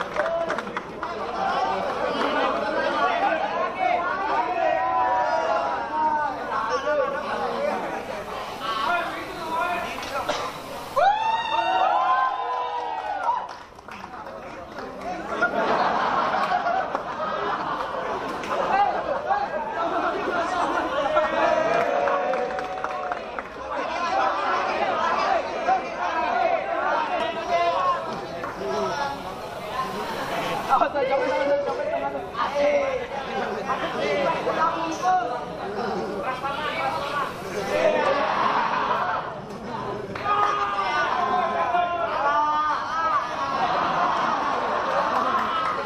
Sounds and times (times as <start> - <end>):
Speech: 0.0 - 10.6, 18.0 - 45.8.